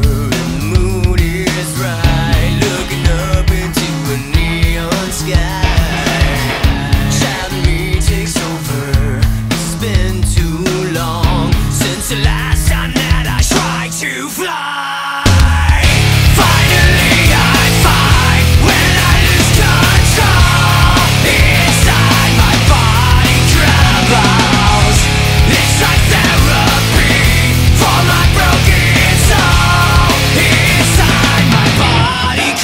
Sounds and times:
Exciting music: 0:00.2 - 0:12.0, 0:15.3 - 0:32.6.

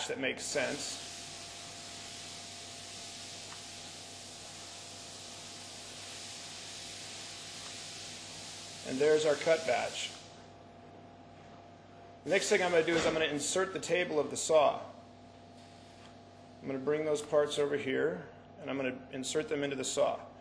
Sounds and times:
Speech: 0:00.0 - 0:01.0, 0:08.8 - 0:10.2, 0:12.3 - 0:15.0, 0:16.6 - 0:20.4.

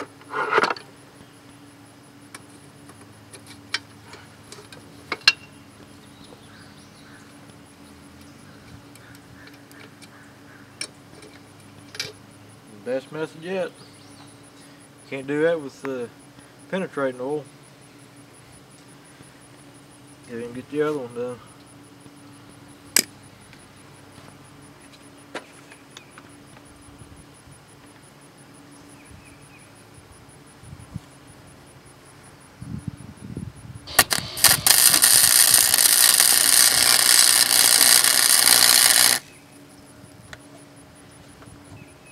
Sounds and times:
Outside, urban or manmade: 0:00.0 - 0:42.1.

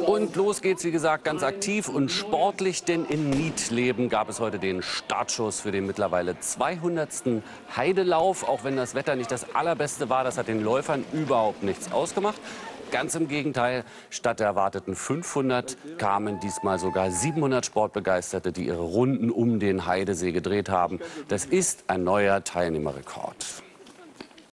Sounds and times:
Speech: 0:00.0 - 0:24.2
Run: 0:08.2 - 0:13.3, 0:23.4 - 0:24.5.

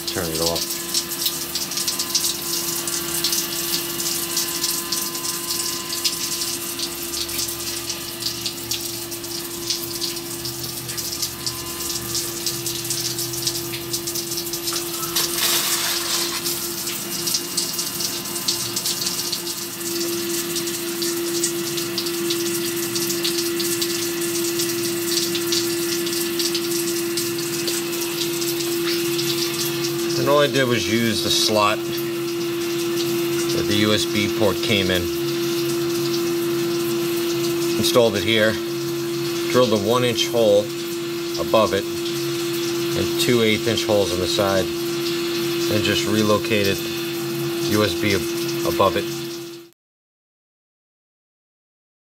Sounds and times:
Pump (liquid): 0:00.0 - 0:49.8.

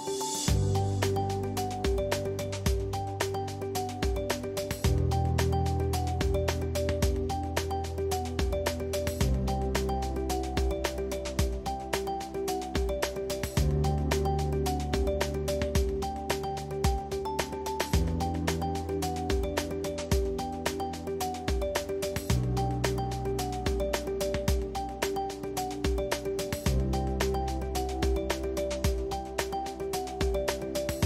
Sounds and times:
Music: 0:00.0 - 0:31.0.

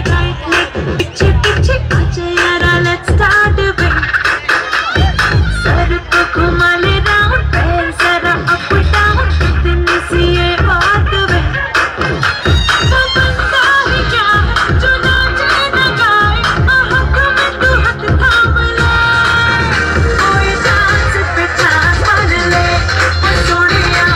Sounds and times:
Music: 0:00.0 - 0:24.1
Singing: 0:00.0 - 0:24.1.

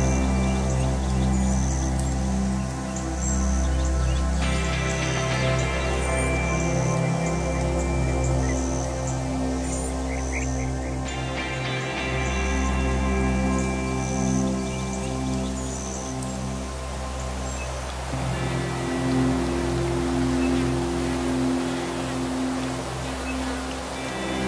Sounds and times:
Music: 0:00.0 - 0:24.4.

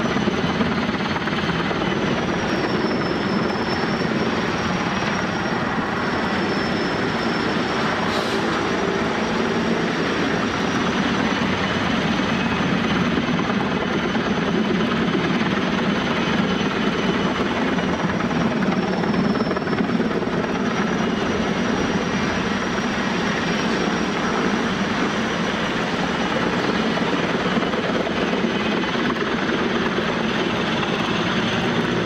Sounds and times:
Vehicle: 0:01.8 - 0:13.9.

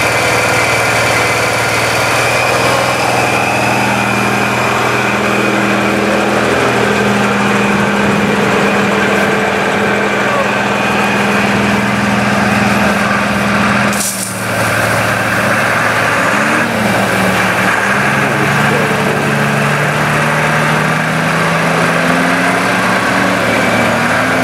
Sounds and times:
Truck: 0:00.0 - 0:24.4.

